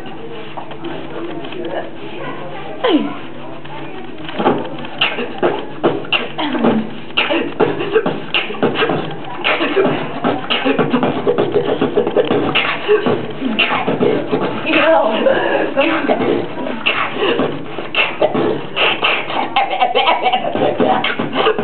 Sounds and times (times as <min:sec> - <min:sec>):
Beatboxing: 0:02.7 - 0:21.6.